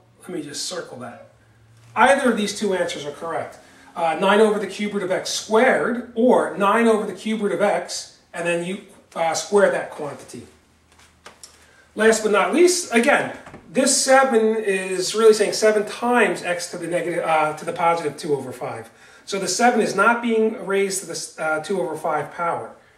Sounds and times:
Speech: 0:00.0 - 0:01.4, 0:02.0 - 0:10.5, 0:12.0 - 0:22.8.

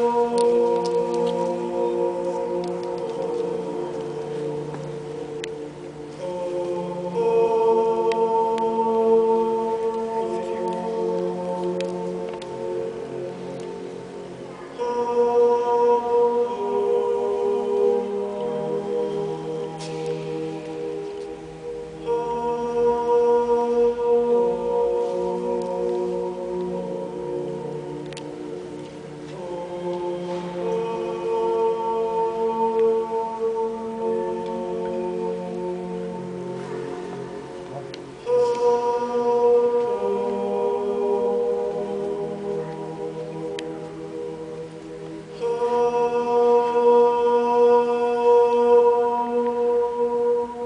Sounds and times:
Music: 0:00.0 - 0:50.6.

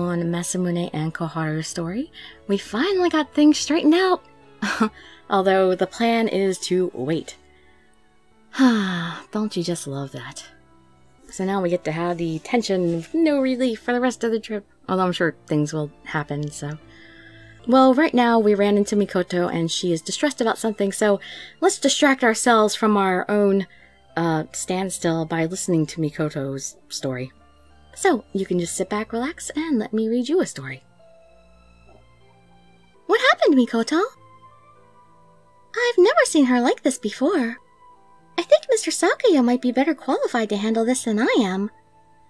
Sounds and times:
Music: 0:00.0 - 0:42.2
Narration, monologue: 0:00.0 - 0:42.2.

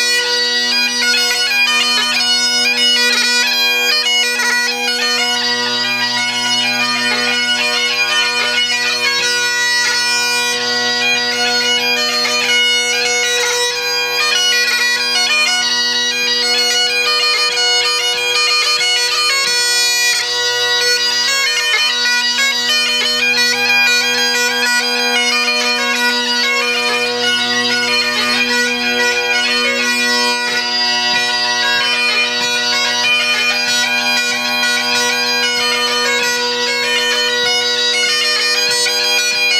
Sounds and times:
Bagpipes: 0:00.0 - 0:39.5.

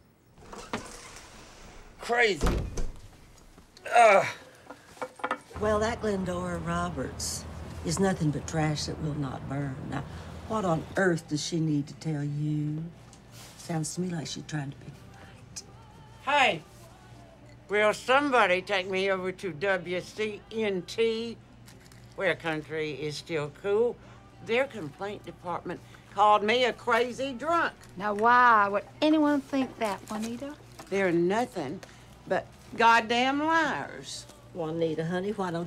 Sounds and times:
Music: 0:03.5 - 0:35.6.

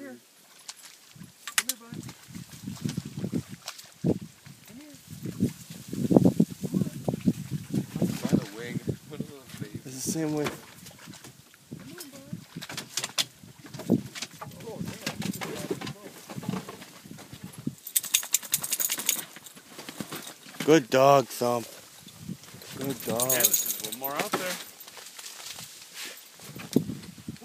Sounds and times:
Speech: 0:14.6 - 0:16.2, 0:20.6 - 0:21.7, 0:22.8 - 0:24.6.

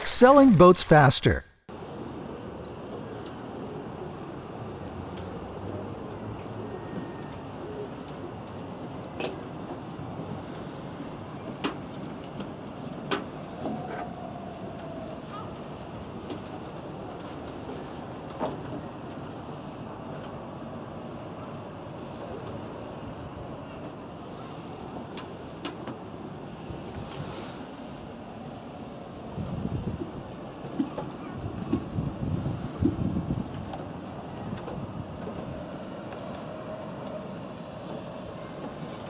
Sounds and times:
Rowboat, canoe, kayak: 0:02.0 - 0:39.0.

